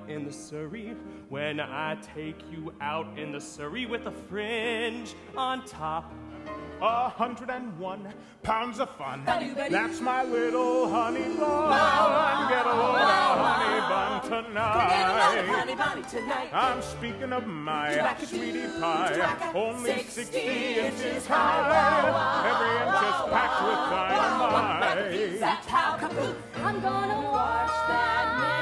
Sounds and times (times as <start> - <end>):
Male singing: 0.0 - 6.1, 6.8 - 12.6, 16.5 - 20.3
Music: 0.0 - 28.6.